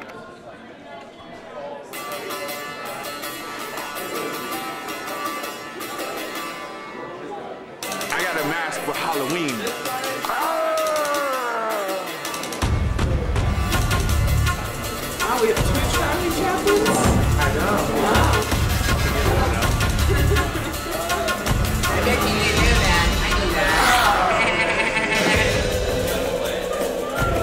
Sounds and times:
Music: 0:01.7 - 0:27.4.

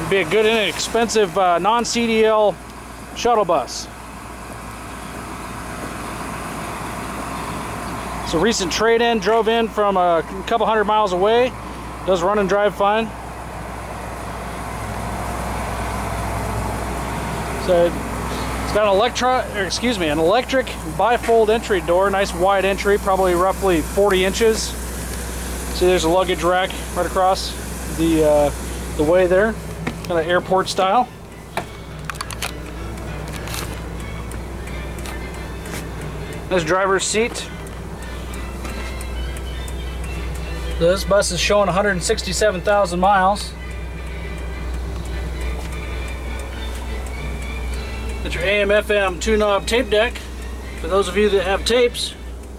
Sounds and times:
Speech: 0:00.0 - 0:02.6, 0:03.2 - 0:03.9, 0:08.2 - 0:13.2, 0:17.6 - 0:18.0, 0:18.7 - 0:24.8, 0:25.8 - 0:31.1, 0:36.5 - 0:37.5, 0:40.8 - 0:43.6, 0:48.2 - 0:50.2, 0:50.8 - 0:52.2
Vehicle: 0:00.0 - 0:52.5.

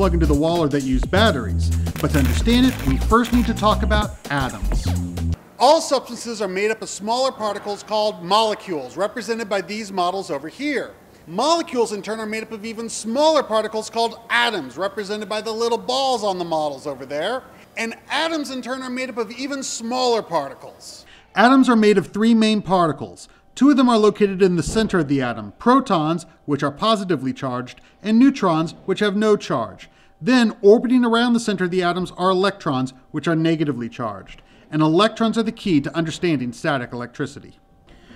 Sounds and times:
Speech: 0:00.0 - 0:04.9, 0:05.6 - 0:37.6.

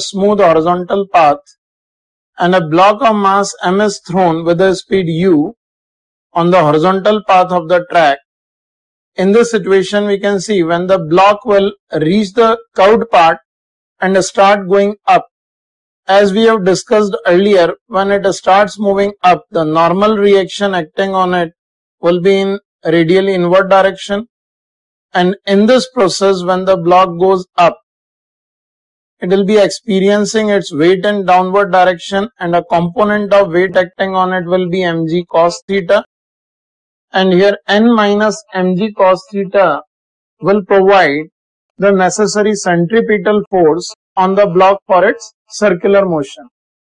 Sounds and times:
Speech: 0:00.0 - 0:01.5, 0:02.4 - 0:05.6, 0:06.4 - 0:08.2, 0:09.2 - 0:13.4, 0:14.0 - 0:15.3, 0:16.1 - 0:24.3, 0:25.2 - 0:27.8, 0:29.2 - 0:36.1, 0:37.1 - 0:46.5.

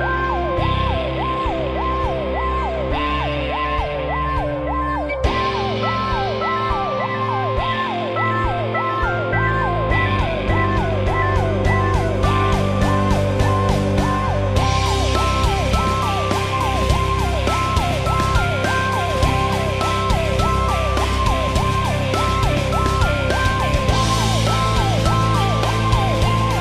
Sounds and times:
Music: 0:00.0 - 0:26.6.

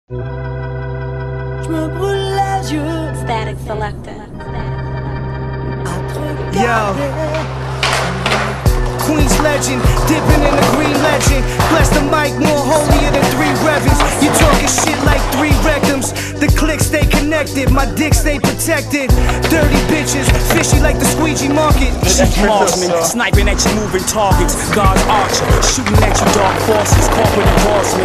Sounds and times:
Music: 0:00.1 - 0:28.0
Skateboard: 0:07.8 - 0:16.2, 0:19.3 - 0:28.0.

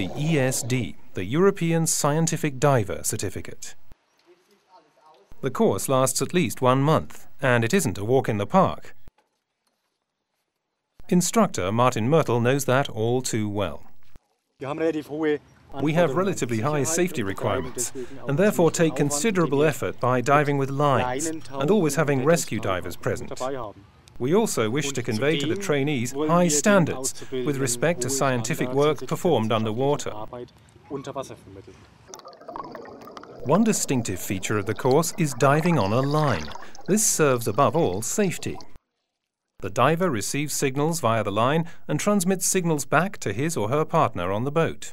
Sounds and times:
Speech: 0:00.0 - 0:09.0, 0:11.0 - 0:13.9, 0:14.6 - 0:31.8, 0:33.4 - 0:38.7, 0:39.6 - 0:44.9.

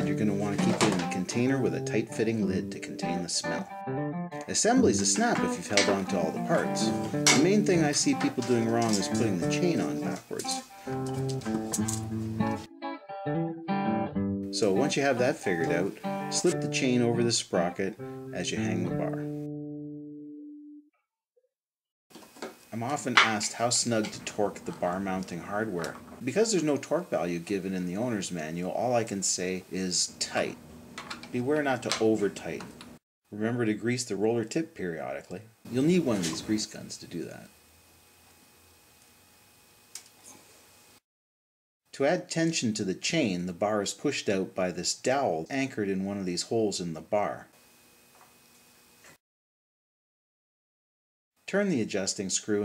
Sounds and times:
Speech: 0:00.0 - 0:03.7, 0:04.4 - 0:10.6, 0:14.6 - 0:19.2, 0:22.7 - 0:30.6, 0:31.3 - 0:32.7, 0:33.3 - 0:37.5, 0:41.9 - 0:47.5, 0:51.5 - 0:52.6
Music: 0:00.0 - 0:20.9.

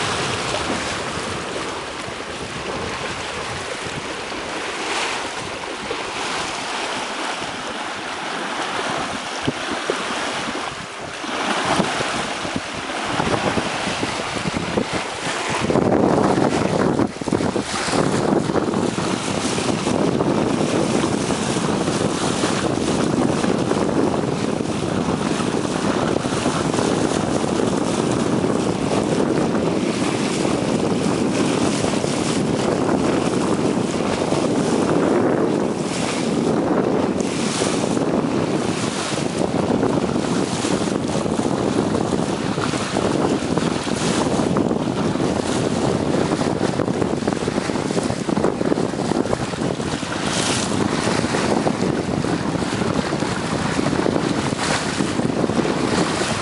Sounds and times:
Sailboat, sailing ship: 0:00.0 - 0:56.4
Ship: 0:00.0 - 0:56.4.

